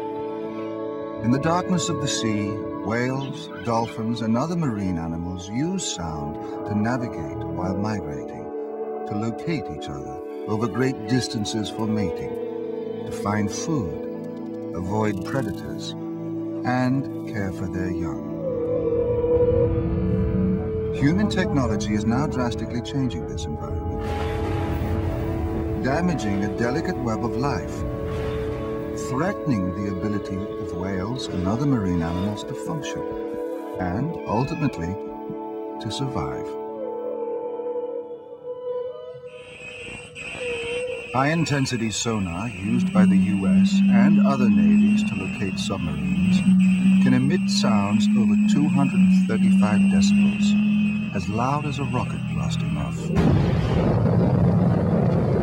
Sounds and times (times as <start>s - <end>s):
Music: 0.0s - 55.4s
Speech: 1.2s - 8.4s, 9.1s - 12.3s, 13.1s - 14.0s, 14.8s - 15.9s, 16.7s - 18.2s, 21.0s - 24.0s, 25.8s - 27.7s, 29.0s - 33.1s, 33.8s - 35.0s, 35.8s - 36.5s, 41.2s - 46.3s, 47.0s - 50.5s, 51.2s - 53.2s.